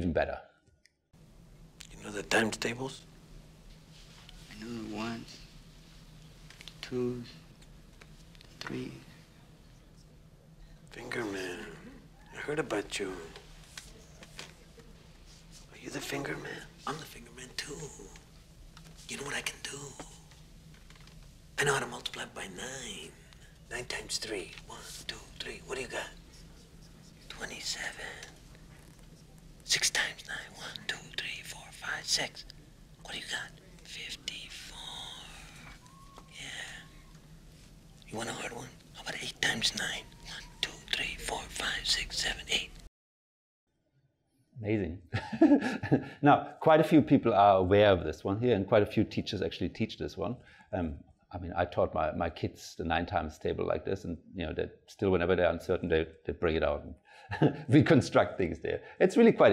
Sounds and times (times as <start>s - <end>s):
Whispering: 10.7s - 18.3s, 19.0s - 20.4s, 21.6s - 37.2s, 38.0s - 42.9s.